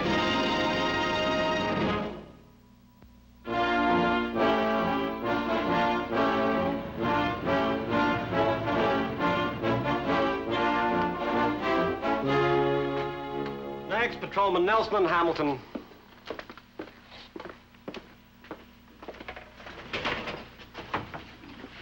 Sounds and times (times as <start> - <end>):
Music: 0.0 - 2.6, 3.4 - 14.8
Speech: 13.9 - 15.7.